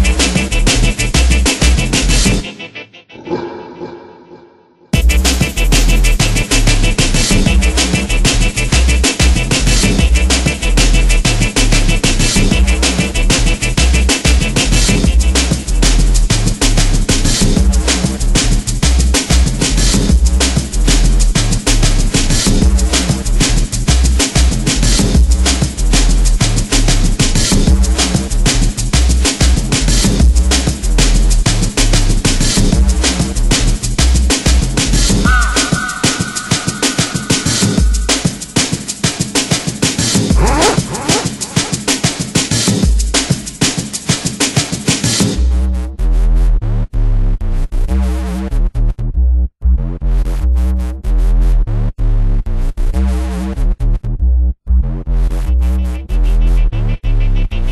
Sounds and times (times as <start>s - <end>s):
Music: 0.0s - 3.2s, 5.0s - 48.6s, 53.0s - 57.7s.